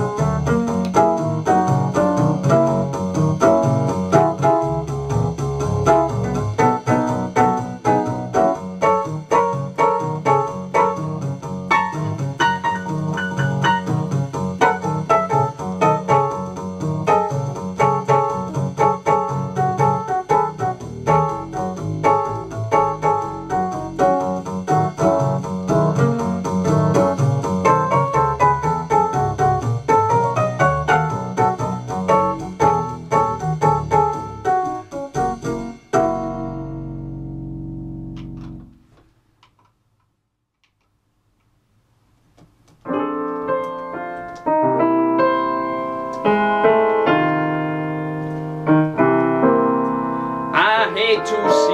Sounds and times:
Keyboard (musical): 0.0s - 38.7s, 42.9s - 51.7s
Blues: 0.0s - 38.8s
Jazz: 0.0s - 38.9s, 42.3s - 51.7s.

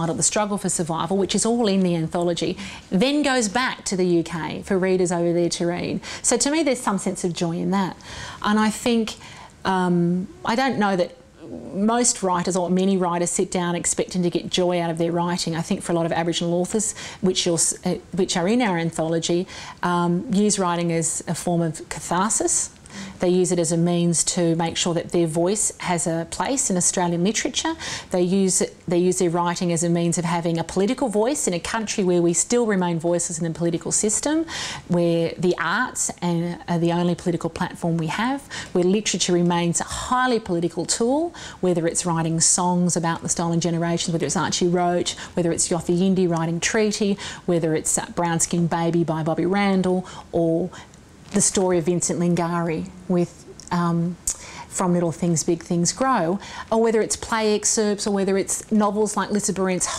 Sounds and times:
Speech: 0.0s - 50.7s, 51.3s - 54.2s, 54.8s - 59.9s.

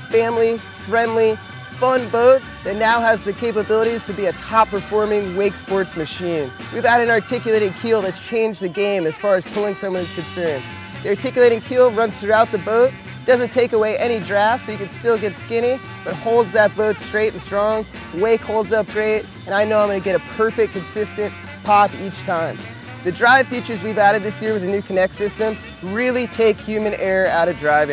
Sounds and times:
Music: 0.0s - 27.9s
Speech: 0.0s - 27.9s.

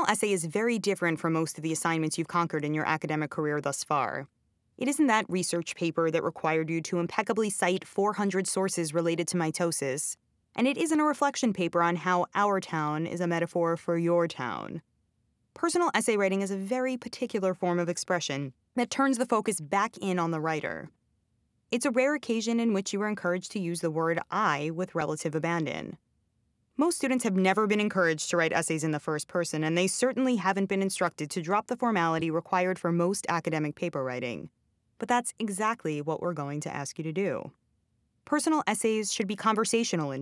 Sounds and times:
Speech: 0.0s - 14.8s, 15.6s - 20.9s, 21.8s - 26.0s, 26.8s - 37.5s, 38.3s - 40.2s.

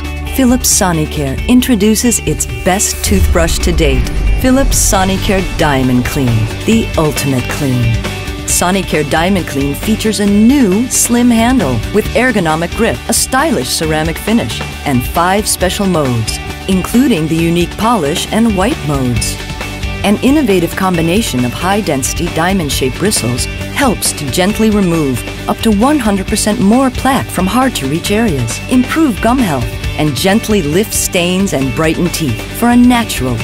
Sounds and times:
Music: 0.0s - 33.4s
Speech: 0.3s - 19.4s, 20.0s - 33.4s.

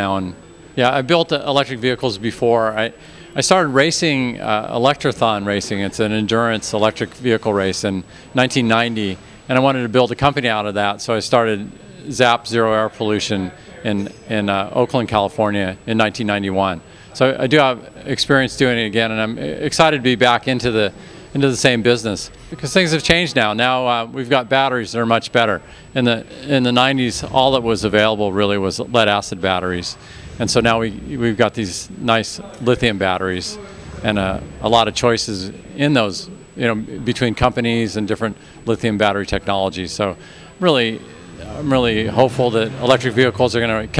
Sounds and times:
Speech: 0.0s - 44.0s.

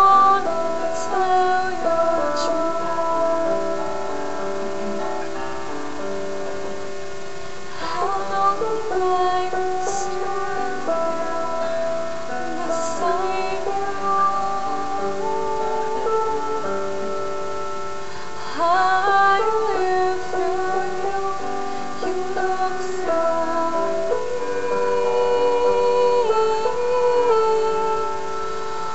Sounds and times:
Female singing: 0.0s - 4.7s, 7.8s - 17.3s, 18.4s - 28.9s
Music: 0.0s - 28.9s.

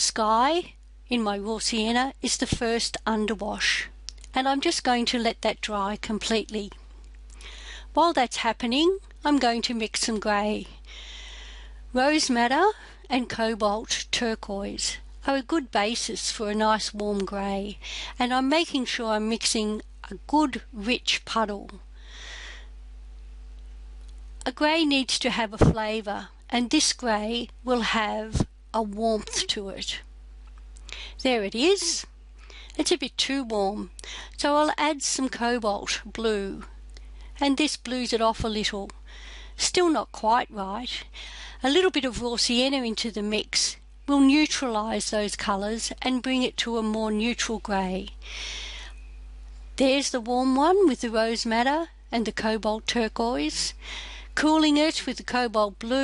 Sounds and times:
Speech: 0.0s - 6.8s, 7.9s - 10.8s, 12.0s - 21.8s, 24.4s - 30.1s, 31.2s - 32.1s, 32.7s - 36.8s, 37.4s - 39.0s, 39.6s - 48.2s, 49.8s - 53.8s, 54.4s - 56.0s.

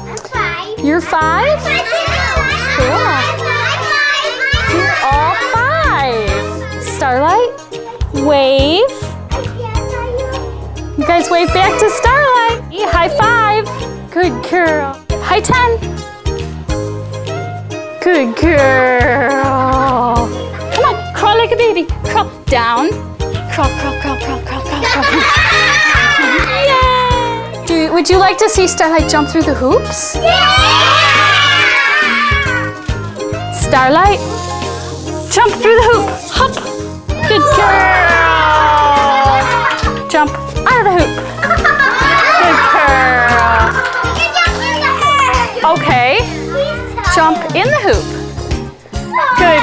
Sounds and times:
Music: 0.0s - 49.6s.

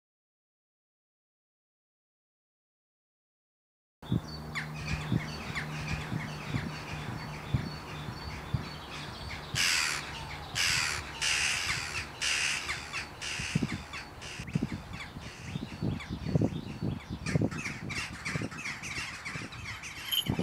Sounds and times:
Outside, rural or natural: 4.0s - 20.4s
Caw: 9.0s - 14.4s.

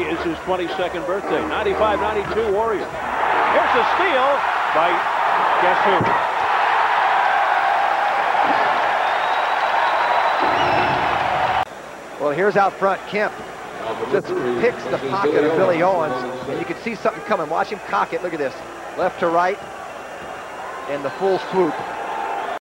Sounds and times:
Speech: 12.2s - 19.6s, 20.9s - 21.8s.

